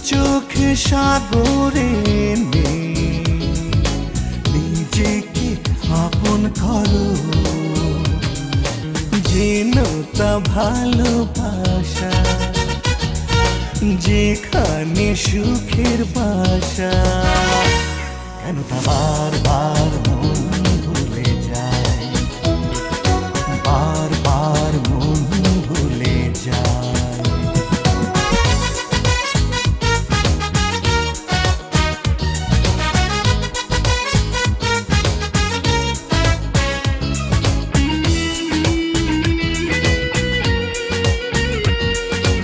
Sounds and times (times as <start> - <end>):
Music: 0.0 - 42.4.